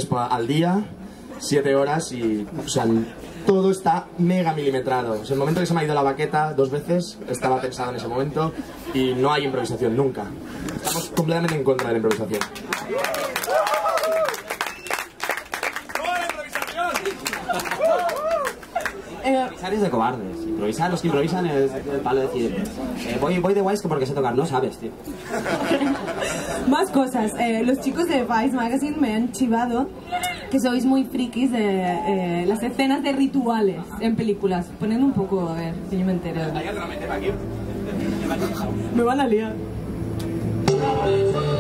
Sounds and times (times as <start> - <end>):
Applause: 11.4 - 19.0.